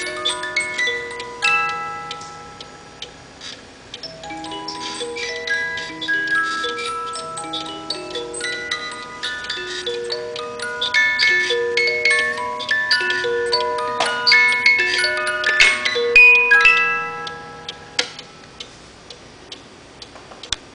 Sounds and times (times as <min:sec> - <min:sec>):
Music: 0:00.0 - 0:03.4, 0:04.0 - 0:18.7.